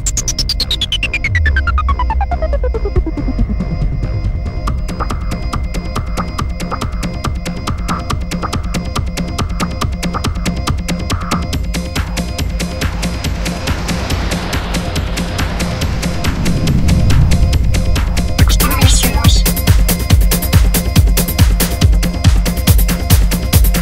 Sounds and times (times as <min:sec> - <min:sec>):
Electronica: 0:00.0 - 0:09.8, 0:16.7 - 0:21.1
Trance music: 0:00.0 - 0:23.8.